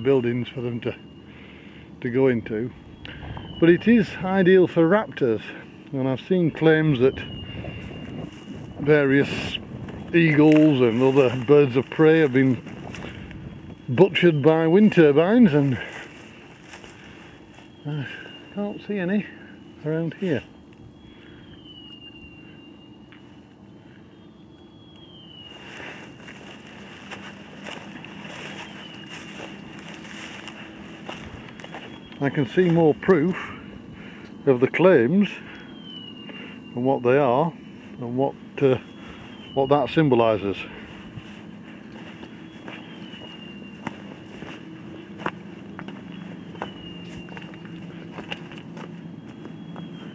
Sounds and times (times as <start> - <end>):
Wind noise (microphone): 2.8 - 3.6, 7.1 - 10.2, 12.5 - 13.9.